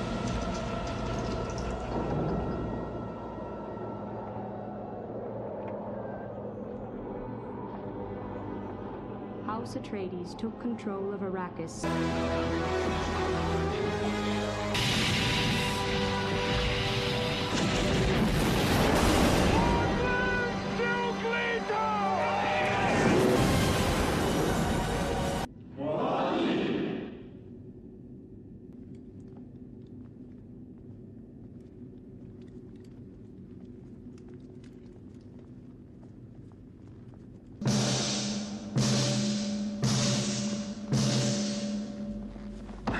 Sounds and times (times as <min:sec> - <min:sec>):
Timpani: 0:37.6 - 0:42.9.